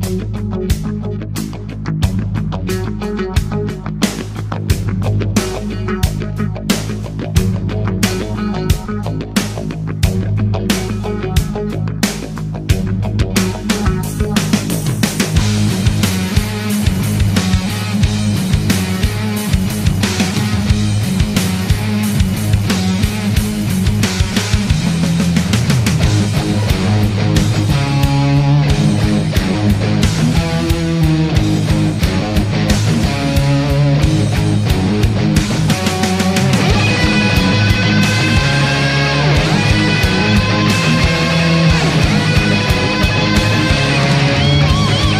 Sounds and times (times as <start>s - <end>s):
Electronic music: 0.0s - 45.1s
Heavy metal: 0.0s - 45.1s.